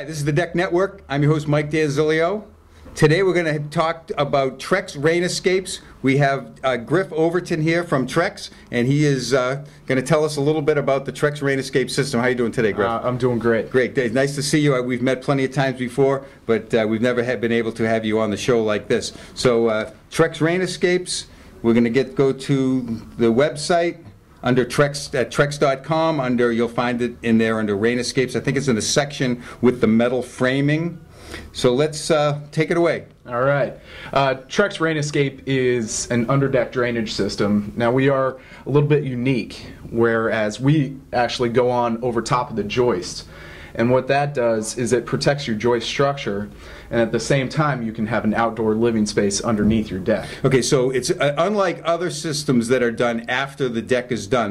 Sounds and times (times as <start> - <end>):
Speech: 0.0 - 54.5.